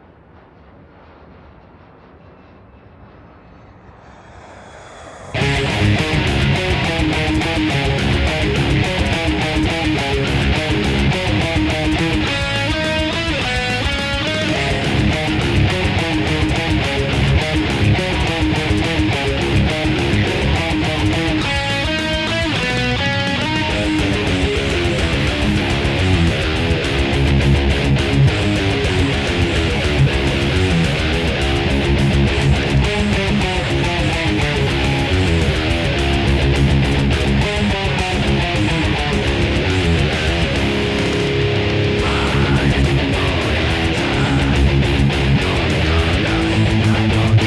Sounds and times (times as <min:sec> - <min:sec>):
Electric guitar: 0:05.1 - 0:47.4
Strum: 0:05.4 - 0:47.4.